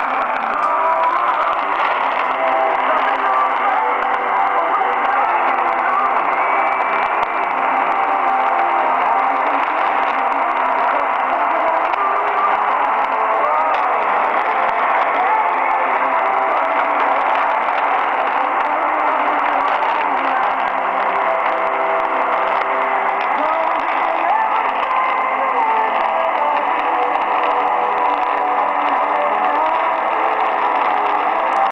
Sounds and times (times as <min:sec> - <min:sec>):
Music: 0:00.0 - 0:31.7
Radio: 0:00.0 - 0:31.7.